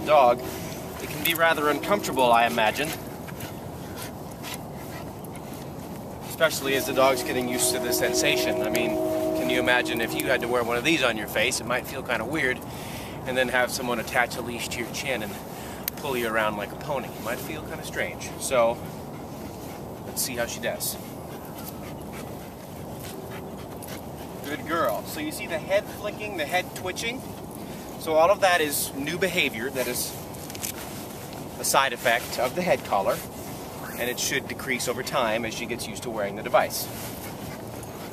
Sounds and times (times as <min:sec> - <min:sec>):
Speech: 0:00.0 - 0:00.4, 0:01.0 - 0:03.0, 0:06.3 - 0:12.6, 0:13.3 - 0:15.4, 0:16.0 - 0:18.8, 0:20.1 - 0:21.0, 0:24.5 - 0:27.2, 0:28.0 - 0:30.2, 0:31.6 - 0:33.3, 0:34.0 - 0:36.9.